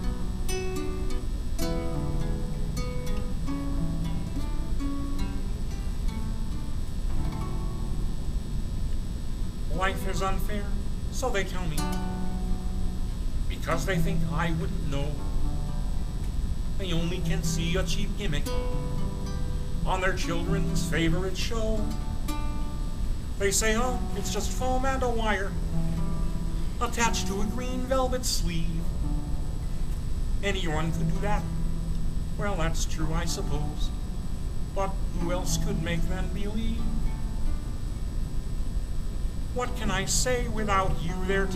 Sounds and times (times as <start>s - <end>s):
Music: 0.0s - 38.4s, 39.6s - 41.5s.